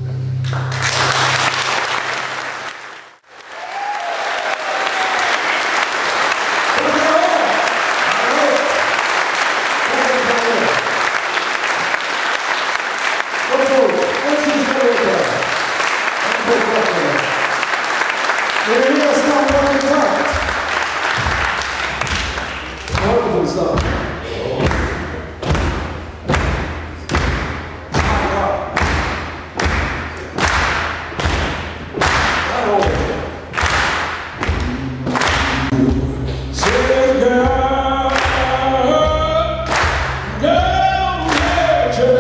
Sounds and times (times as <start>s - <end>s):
Speech: 6.8s - 8.8s, 9.8s - 10.9s, 13.5s - 15.5s, 16.2s - 17.3s, 18.6s - 20.5s, 22.9s - 24.9s, 28.0s - 28.8s, 32.5s - 33.3s, 40.4s - 42.2s
Singing: 34.5s - 39.7s, 40.3s - 42.2s.